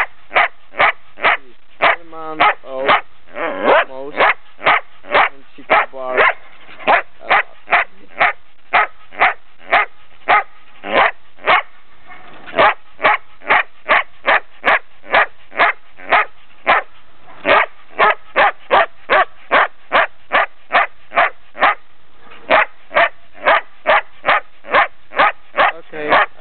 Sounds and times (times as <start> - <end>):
Bark: 0.0 - 26.4
Bow-wow: 0.0 - 26.4.